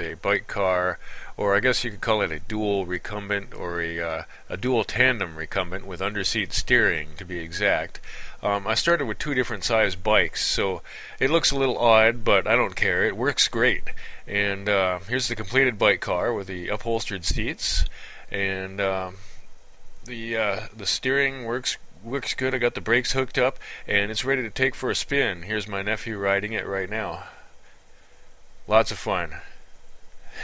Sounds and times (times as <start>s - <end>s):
Speech: 0.0s - 19.3s, 20.1s - 27.4s, 28.7s - 29.6s.